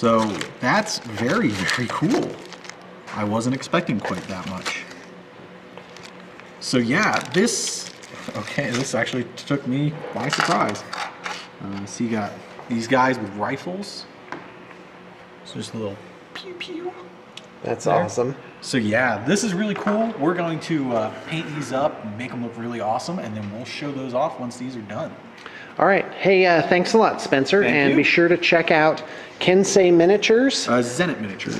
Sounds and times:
Speech: 3.1s - 4.9s, 15.5s - 25.2s, 25.8s - 31.5s.

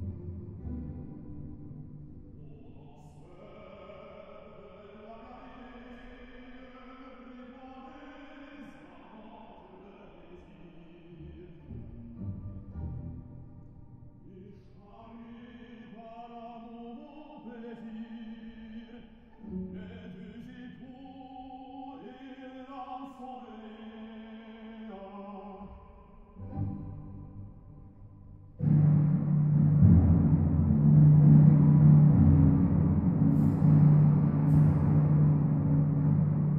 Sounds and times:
Ambient music: 0.0s - 4.2s, 11.0s - 14.4s, 26.2s - 36.5s.

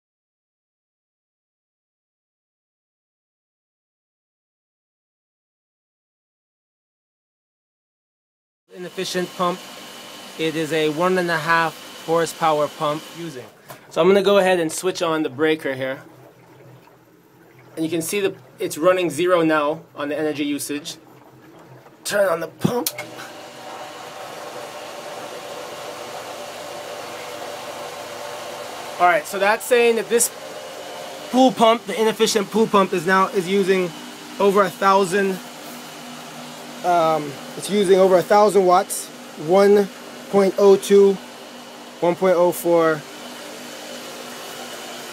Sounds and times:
Speech: 8.7s - 9.6s, 10.4s - 16.0s, 17.8s - 21.0s, 22.0s - 23.0s, 29.0s - 30.3s, 31.3s - 35.4s, 36.8s - 41.2s, 42.0s - 43.0s.

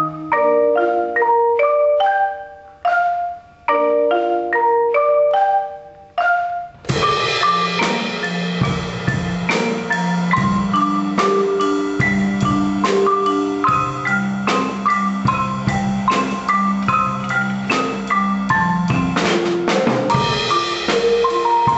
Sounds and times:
Marimba, xylophone: 0.0s - 21.7s
Vibraphone: 0.0s - 21.7s
Drum kit: 6.2s - 21.7s
Drum: 6.7s - 21.7s.

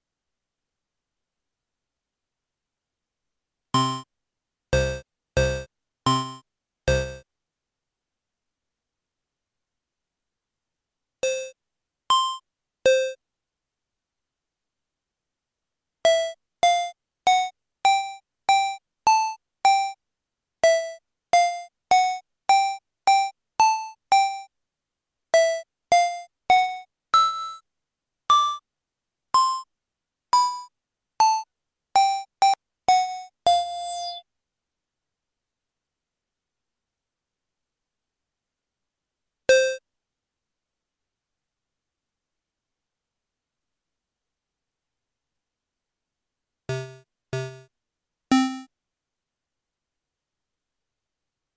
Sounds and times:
Music: 3.8s - 4.1s, 4.8s - 7.2s, 12.1s - 13.2s, 16.1s - 20.0s, 20.6s - 24.5s, 25.4s - 27.6s, 29.4s - 29.7s, 30.4s - 34.2s, 48.3s - 48.7s.

